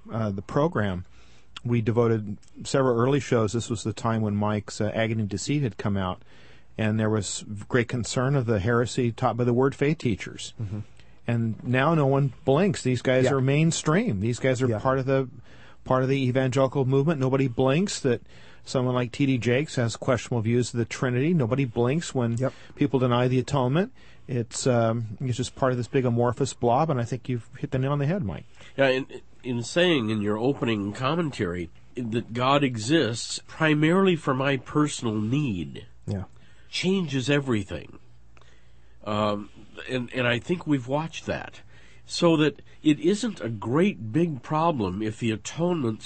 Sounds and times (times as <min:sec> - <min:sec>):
Speech: 0:00.0 - 0:06.2, 0:06.8 - 0:38.0, 0:39.0 - 0:46.0.